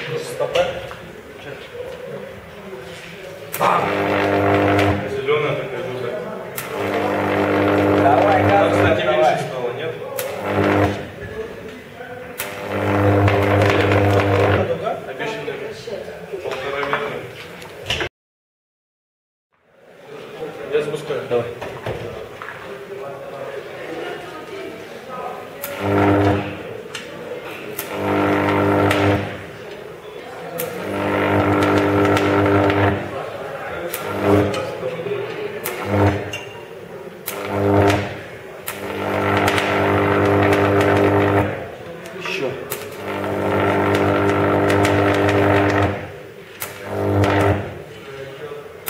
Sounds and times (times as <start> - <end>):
Speech: 0.0 - 4.0, 4.9 - 7.0, 8.0 - 10.5, 11.2 - 12.6, 14.6 - 18.0, 20.0 - 27.9, 32.9 - 37.2, 41.5 - 42.8, 48.0 - 48.8.